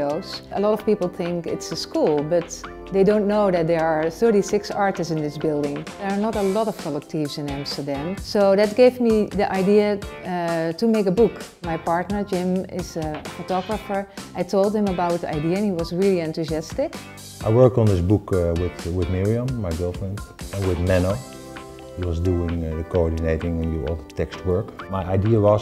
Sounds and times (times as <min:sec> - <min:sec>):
Music: 0:00.0 - 0:25.6.